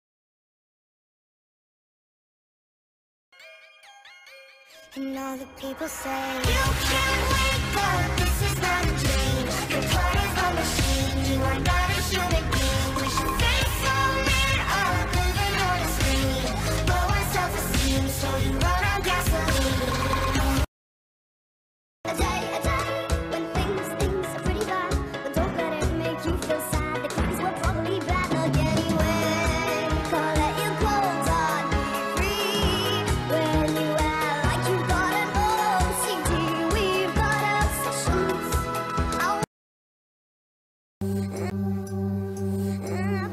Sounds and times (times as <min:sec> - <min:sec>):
Music: 0:03.4 - 0:20.7, 0:22.1 - 0:39.5, 0:41.0 - 0:43.3.